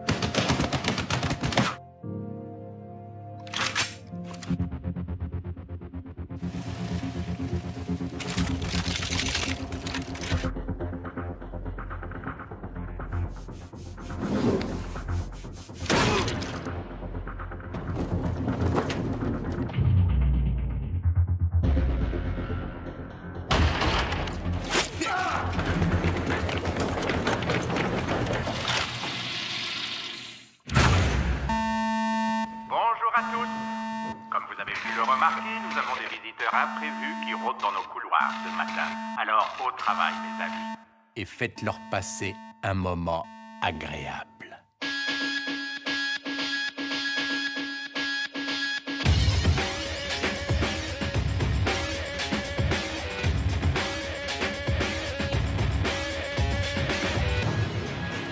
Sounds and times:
Music: 0.0 - 27.6, 44.8 - 58.3.

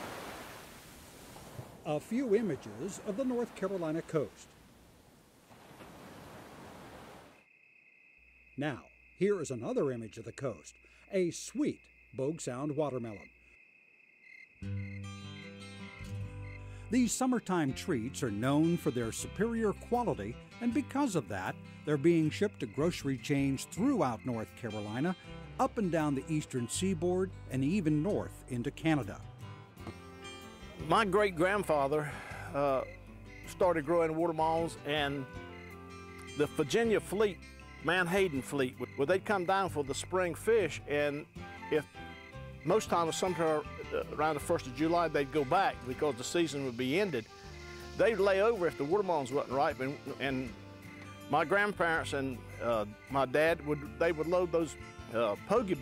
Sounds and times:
Speech: 1.9 - 4.5, 8.6 - 13.3, 16.9 - 29.2, 30.8 - 32.9, 33.5 - 35.2, 36.4 - 41.2, 42.7 - 47.2, 48.0 - 50.5, 51.3 - 55.8
Music: 14.6 - 55.8.

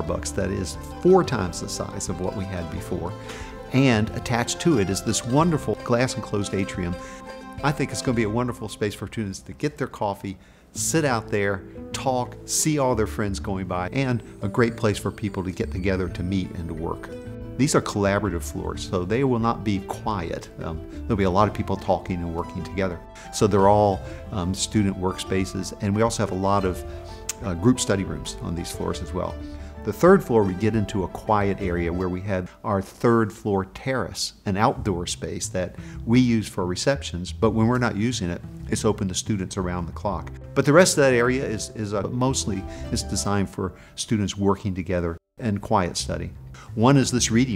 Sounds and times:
Speech: 0.0 - 7.0, 7.6 - 47.5
Music: 0.0 - 47.5.

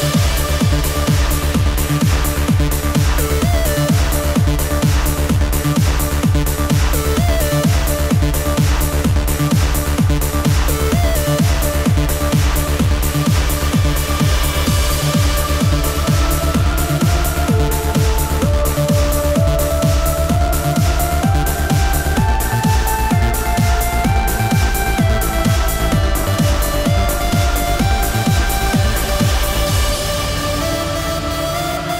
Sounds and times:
Electronic music: 0.0 - 31.9.

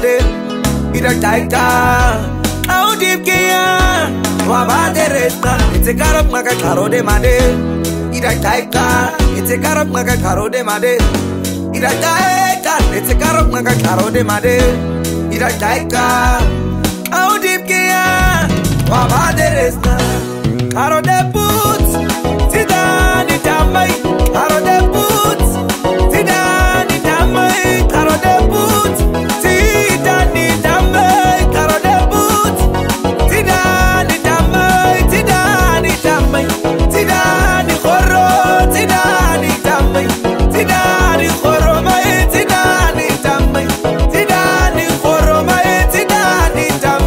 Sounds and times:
Rhythm and blues: 0.0 - 47.0.

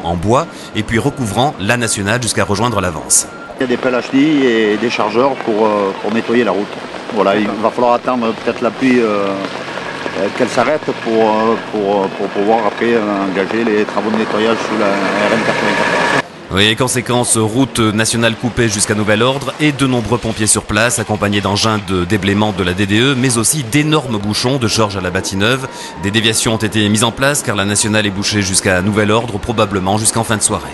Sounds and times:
Speech: 0.0 - 9.5, 10.2 - 15.8, 16.5 - 30.7
Gush: 0.4 - 30.7.

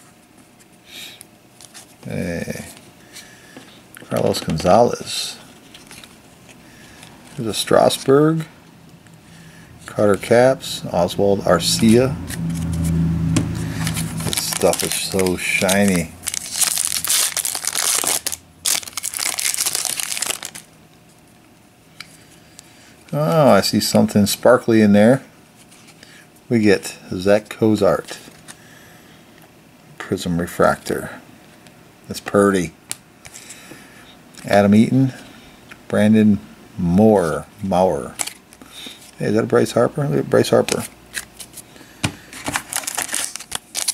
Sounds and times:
Speech: 2.0 - 2.8, 4.0 - 5.4, 7.4 - 8.5, 9.9 - 12.2, 14.4 - 16.2, 23.1 - 25.3, 26.5 - 28.2, 30.0 - 31.2, 32.1 - 32.8, 34.4 - 35.2, 35.9 - 38.2, 39.2 - 40.9.

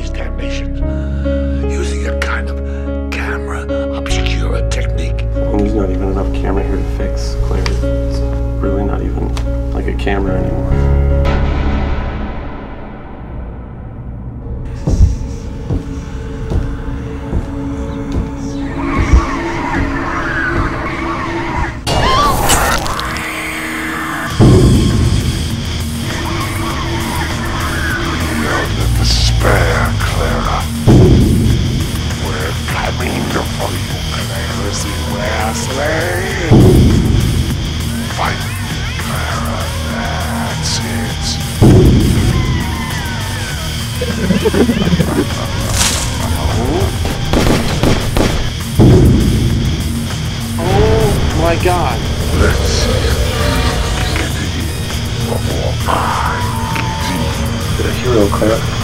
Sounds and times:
Music: 0.0 - 58.8.

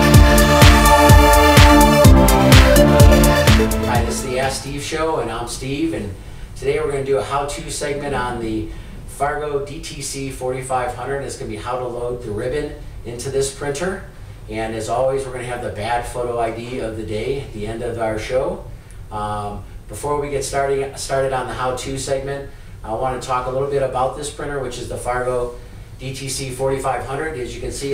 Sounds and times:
Speech: 3.9 - 27.9.

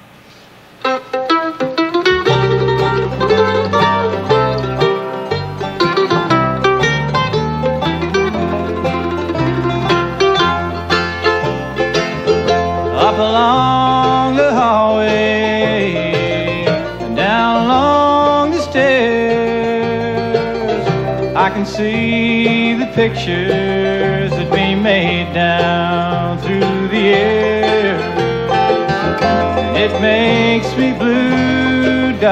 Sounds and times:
Bluegrass: 0.0 - 32.3
Guitar: 0.0 - 32.3
Singing: 12.9 - 20.7, 29.6 - 32.3.

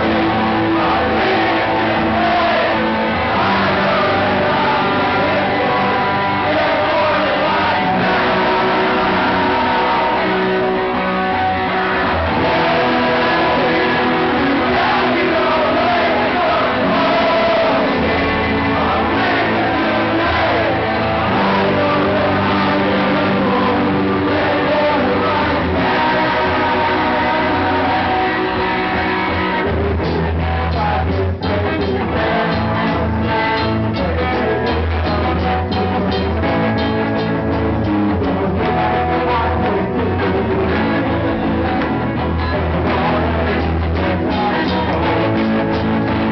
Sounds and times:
Rhythm and blues: 0.0 - 46.3.

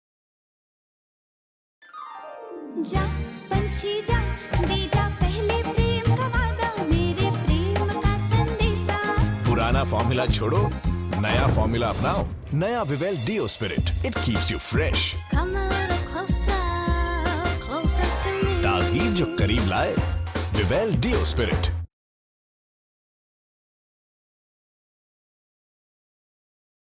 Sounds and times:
Music: 1.8 - 21.9
Speech: 9.5 - 15.2, 18.4 - 21.9.

